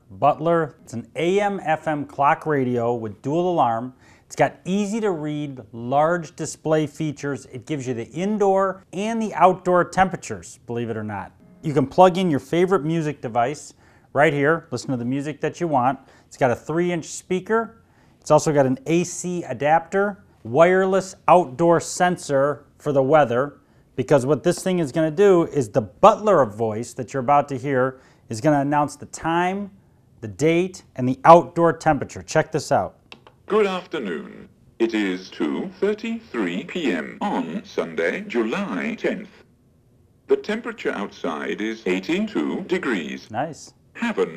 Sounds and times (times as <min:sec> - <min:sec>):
Speech: 0:00.0 - 0:39.4, 0:40.3 - 0:44.3.